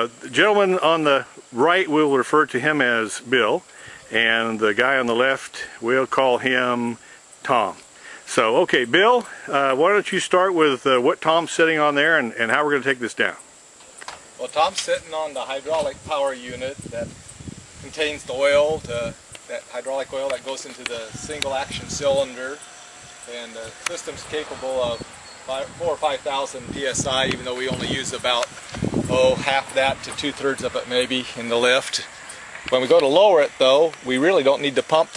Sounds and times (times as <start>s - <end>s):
Speech: 0.0s - 13.4s, 14.4s - 17.1s, 17.8s - 22.6s, 23.3s - 28.5s, 29.1s - 32.1s, 32.7s - 35.1s
Rustling leaves: 9.3s - 35.1s.